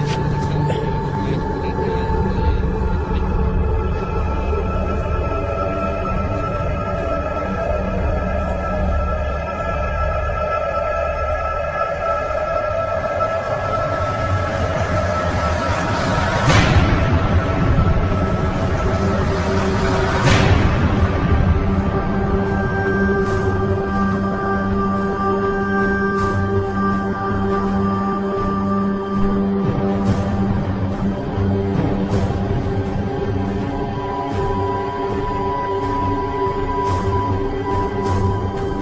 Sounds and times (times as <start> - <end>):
Music: 0.0 - 38.8.